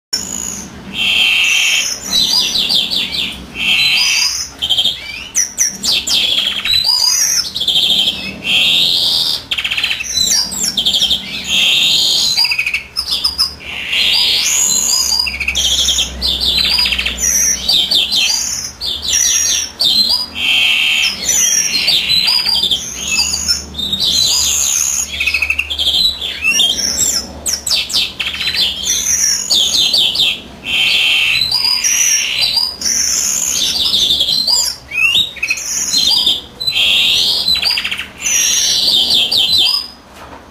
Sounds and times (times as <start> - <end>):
Bird: 0.2 - 40.0.